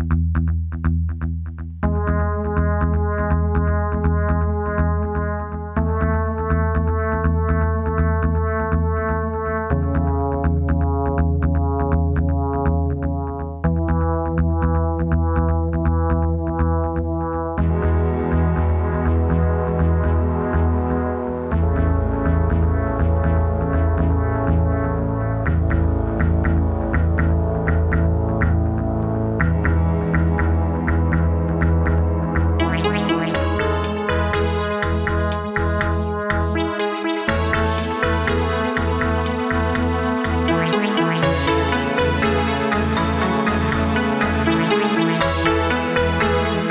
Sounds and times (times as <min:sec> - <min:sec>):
Electronica: 0:00.0 - 0:46.7.